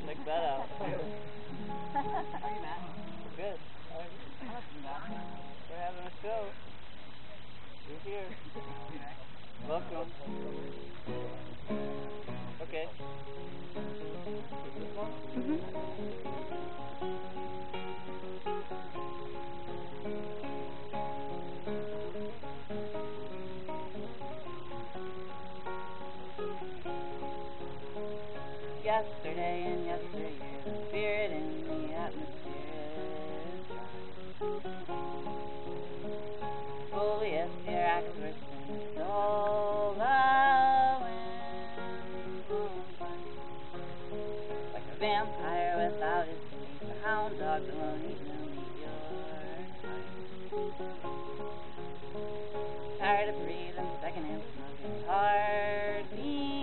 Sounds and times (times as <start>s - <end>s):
Music: 0.0s - 56.6s.